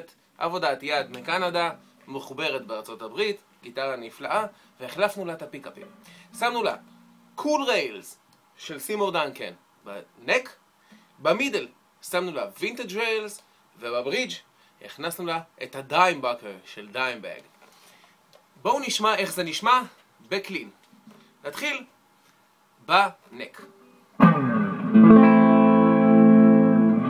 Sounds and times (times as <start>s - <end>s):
Speech: 0.0s - 6.8s, 7.4s - 10.6s, 11.2s - 17.5s, 18.6s - 20.8s, 21.4s - 21.9s, 22.8s - 23.7s
Strum: 0.9s - 2.7s, 4.4s - 8.0s, 23.7s - 27.0s
Electric guitar: 5.8s - 7.4s, 23.7s - 27.0s.